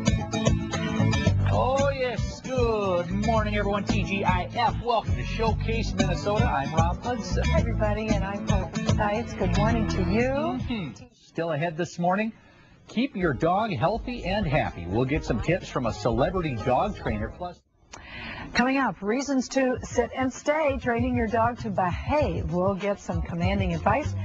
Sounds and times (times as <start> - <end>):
Speech: 9.4 - 17.6.